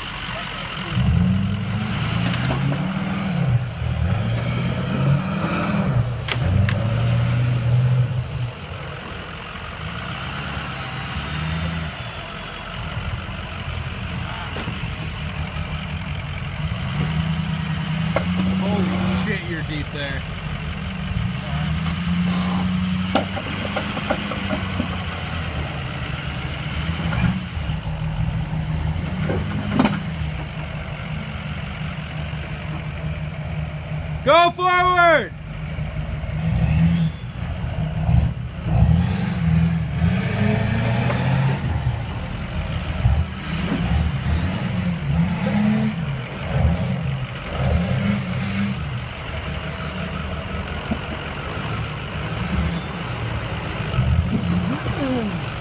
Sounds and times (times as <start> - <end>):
Outside, urban or manmade: 0.0 - 55.6
Truck: 0.0 - 55.6
Speech: 14.2 - 14.8, 18.6 - 20.2, 34.2 - 35.4.